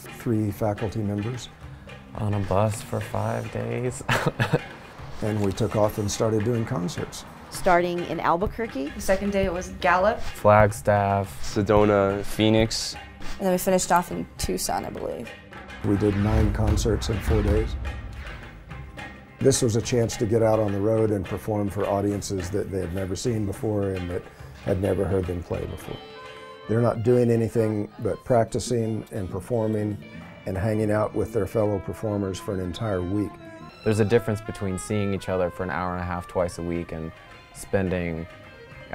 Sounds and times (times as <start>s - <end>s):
Speech: 0.0s - 1.5s, 2.2s - 4.0s, 5.2s - 15.2s, 15.8s - 17.8s, 19.4s - 26.0s, 26.7s - 33.3s, 33.9s - 38.3s
Music: 0.0s - 38.9s.